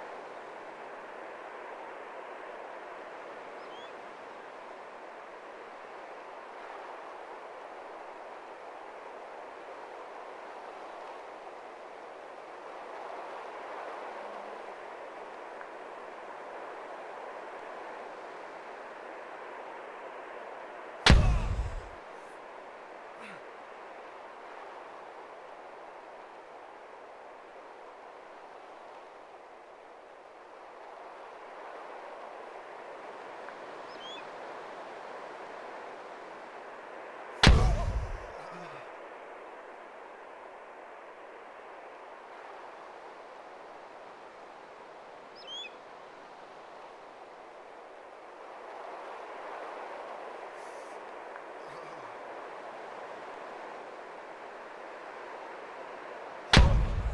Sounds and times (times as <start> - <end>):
Outside, rural or natural: 0.0 - 57.1.